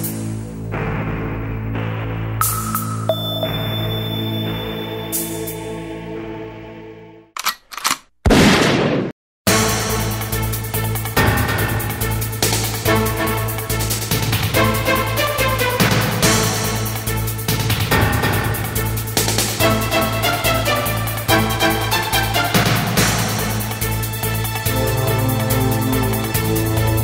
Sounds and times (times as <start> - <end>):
Music: 0.0 - 7.4, 9.5 - 27.0.